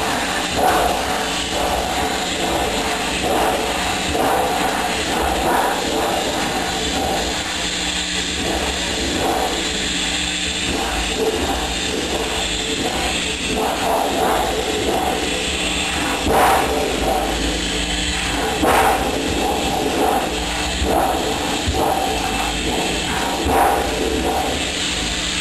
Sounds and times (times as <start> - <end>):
Air conditioning: 0.0 - 25.4.